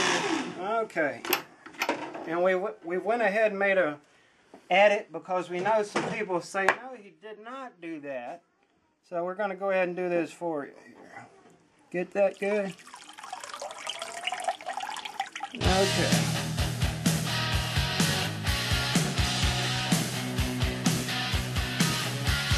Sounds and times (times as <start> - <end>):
Speech: 4.7 - 8.4, 11.9 - 12.8, 15.6 - 16.3
Liquid: 12.2 - 15.6
Music: 15.6 - 22.5.